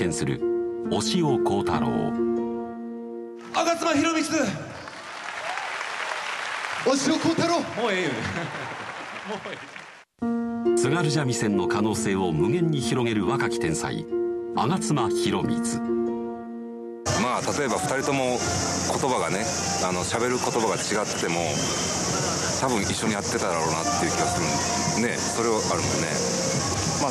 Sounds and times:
Music: 0.0 - 4.8, 10.2 - 27.1
Speech: 6.8 - 8.2, 10.8 - 15.8, 17.1 - 21.6, 22.6 - 26.3.

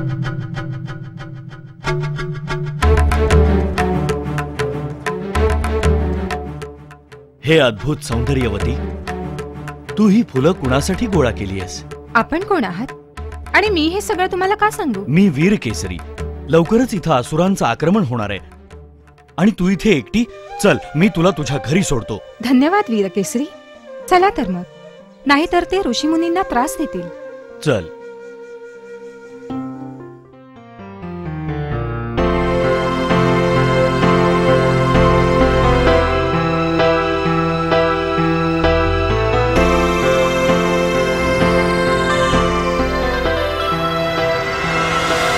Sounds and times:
Background music: 0.0 - 45.3.

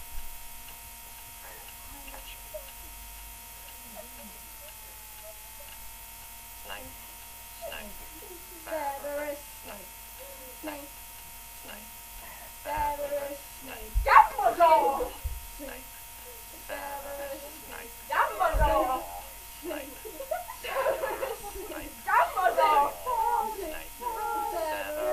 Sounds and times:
Speech: 3.8 - 5.7, 6.7 - 7.0, 7.6 - 10.9, 11.6 - 25.1.

